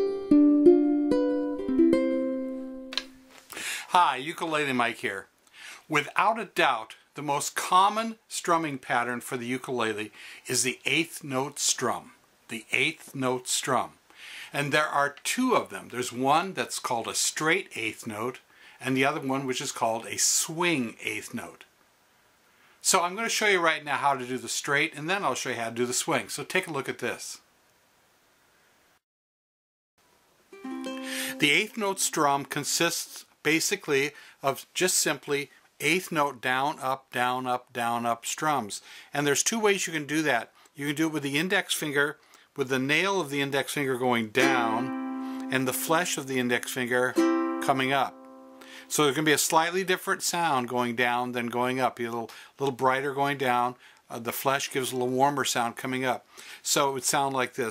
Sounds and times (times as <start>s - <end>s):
Ukulele: 0.0s - 3.5s, 30.5s - 32.8s, 44.4s - 48.8s
Speech: 3.9s - 5.3s, 5.9s - 21.7s, 22.8s - 27.5s, 31.3s - 44.9s, 45.5s - 48.1s, 48.9s - 57.7s.